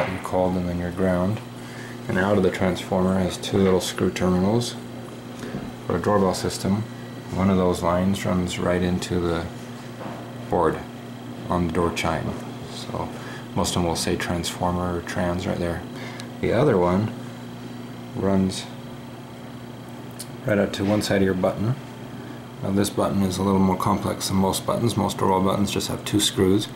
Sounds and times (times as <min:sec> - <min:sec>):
Speech: 0:00.0 - 0:01.5, 0:02.1 - 0:04.9, 0:05.9 - 0:09.6, 0:10.5 - 0:17.2, 0:18.1 - 0:18.8, 0:20.2 - 0:21.8, 0:22.6 - 0:26.7.